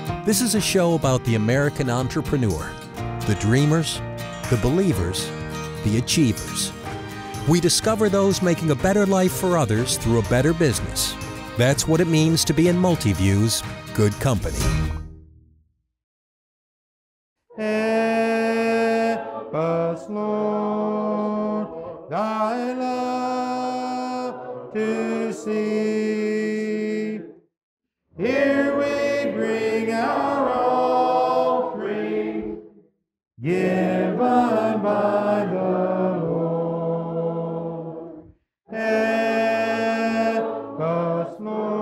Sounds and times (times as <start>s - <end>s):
Music: 0.0s - 15.8s, 17.6s - 26.7s, 28.2s - 41.8s.